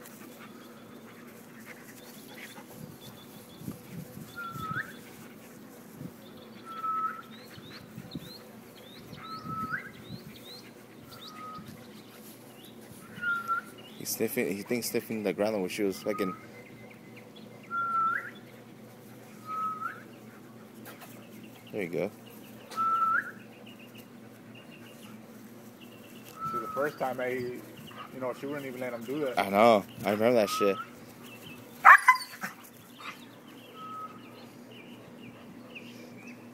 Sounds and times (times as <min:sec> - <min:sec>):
Speech: 0:14.0 - 0:16.4, 0:21.7 - 0:22.2, 0:26.5 - 0:30.8.